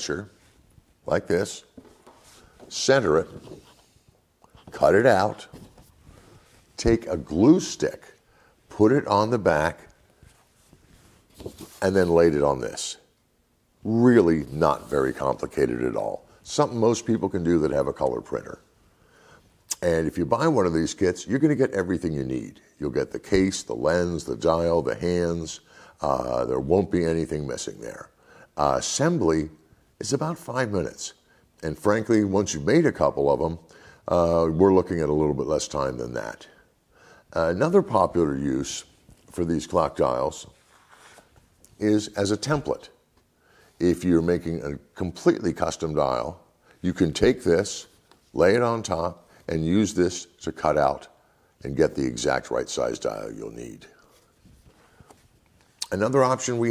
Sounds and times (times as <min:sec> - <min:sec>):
Speech: 0:00.0 - 0:00.4, 0:01.0 - 0:01.8, 0:02.7 - 0:03.6, 0:04.6 - 0:05.7, 0:06.8 - 0:10.0, 0:11.4 - 0:13.1, 0:13.8 - 0:18.7, 0:19.7 - 0:36.7, 0:37.3 - 0:40.6, 0:41.7 - 0:43.0, 0:43.8 - 0:54.1, 0:55.8 - 0:56.7.